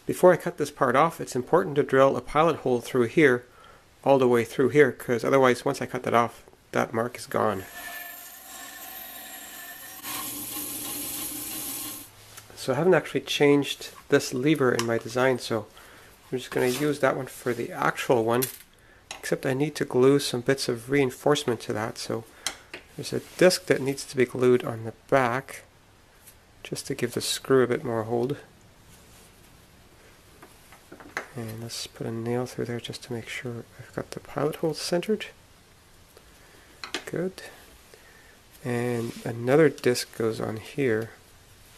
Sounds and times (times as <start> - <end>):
Speech: 0.0 - 7.7, 12.5 - 15.7, 16.3 - 18.5, 19.2 - 22.3, 23.0 - 25.7, 26.6 - 28.5, 31.3 - 35.4, 37.0 - 37.6, 38.6 - 41.2.